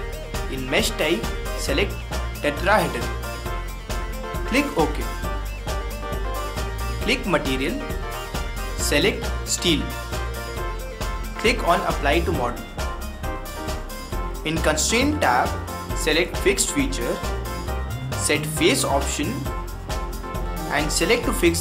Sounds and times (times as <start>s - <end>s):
Music: 0.0s - 21.6s
Speech: 0.5s - 3.1s, 4.4s - 5.1s, 7.0s - 7.8s, 8.8s - 10.0s, 11.4s - 12.7s, 14.5s - 17.2s, 18.2s - 19.5s, 20.7s - 21.6s.